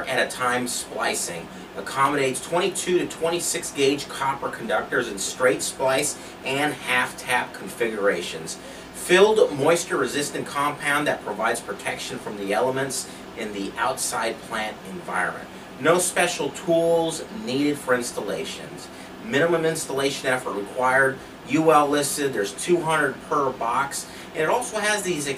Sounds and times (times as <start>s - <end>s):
Speech: 0.0s - 25.3s.